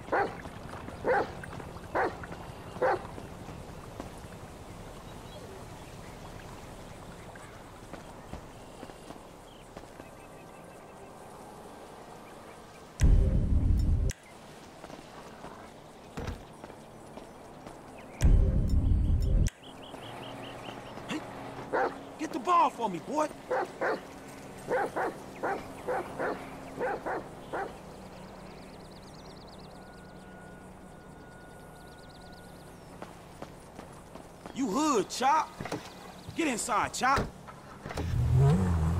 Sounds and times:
Music: 0:18.3 - 0:19.5.

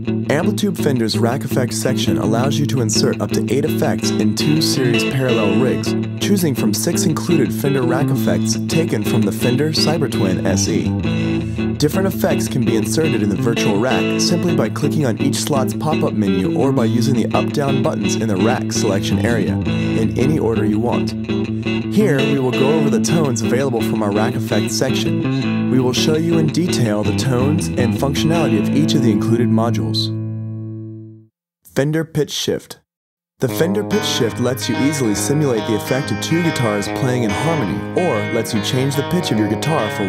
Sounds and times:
Guitar: 0:00.0 - 0:31.3, 0:33.4 - 0:40.0
Speech: 0:00.3 - 0:11.0, 0:11.8 - 0:21.2, 0:21.9 - 0:30.2, 0:31.7 - 0:40.0.

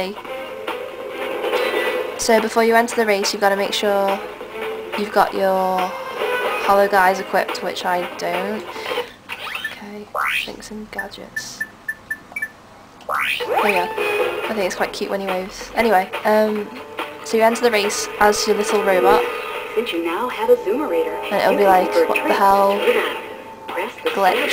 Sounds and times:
Speech: 0:19.8 - 0:22.8, 0:23.7 - 0:24.5.

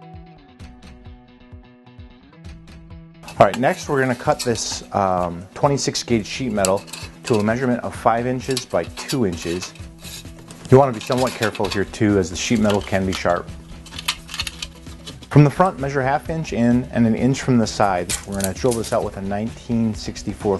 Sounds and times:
Speech: 0:03.3 - 0:09.7, 0:10.7 - 0:13.5, 0:15.3 - 0:20.5.

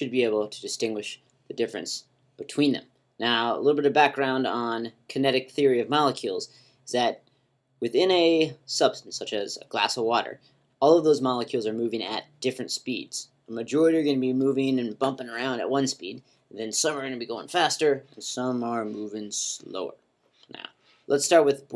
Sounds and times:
Speech: 0:00.0 - 0:07.2, 0:07.8 - 0:21.7.

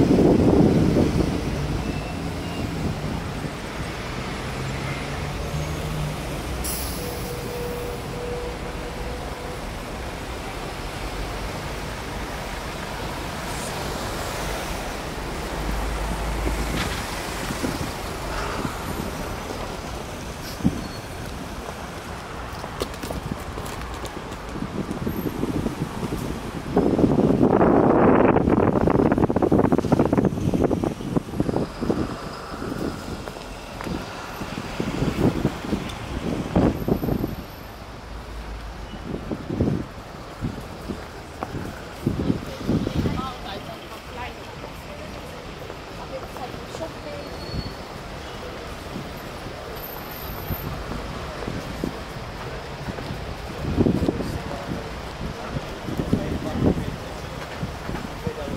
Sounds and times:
Wind noise (microphone): 0:00.0 - 0:02.0, 0:16.5 - 0:19.2, 0:23.0 - 0:37.5, 0:39.0 - 0:43.3, 0:52.8 - 0:58.5.

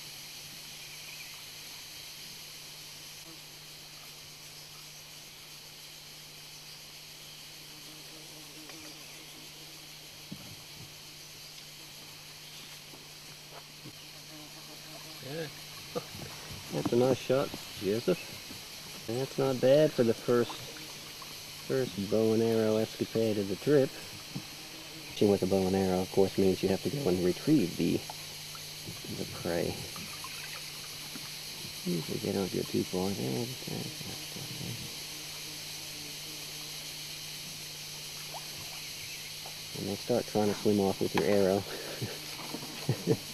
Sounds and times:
Speech: 0:15.2 - 0:15.5, 0:16.7 - 0:18.3, 0:19.1 - 0:20.7, 0:21.7 - 0:24.1, 0:25.2 - 0:28.0, 0:28.9 - 0:30.0, 0:31.8 - 0:34.9, 0:39.8 - 0:42.2.

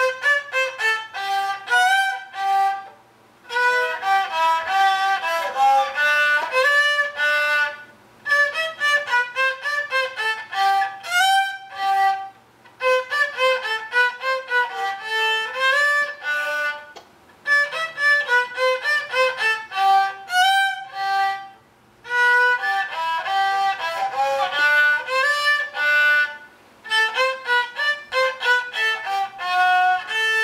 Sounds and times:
Violin, fiddle: 0:00.0 - 0:30.4.

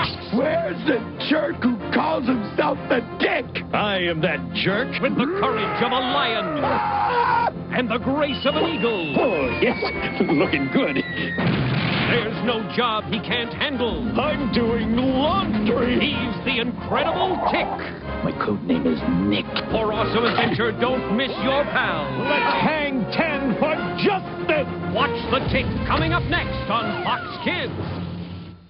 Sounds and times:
Music: 0:00.0 - 0:28.7
Speech: 0:00.3 - 0:06.6, 0:12.1 - 0:27.7.

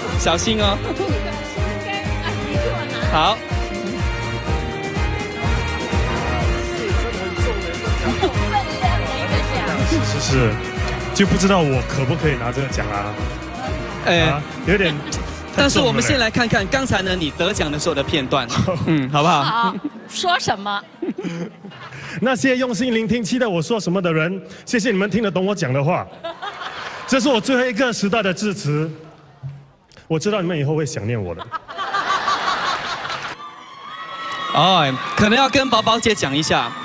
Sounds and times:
Music: 0:00.0 - 0:19.6
Male speech, man speaking: 0:03.1 - 0:03.4, 0:09.9 - 0:10.6, 0:11.2 - 0:13.2, 0:14.0 - 0:19.6, 0:22.2 - 0:26.1, 0:27.1 - 0:29.0, 0:30.1 - 0:31.5, 0:34.5 - 0:36.8.

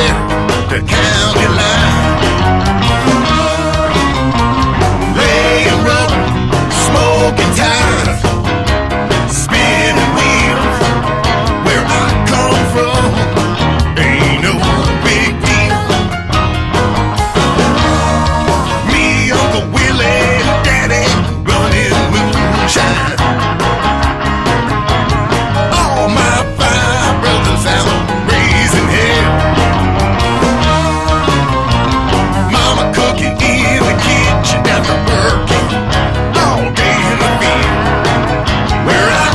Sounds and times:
Music: 0:00.0 - 0:39.3.

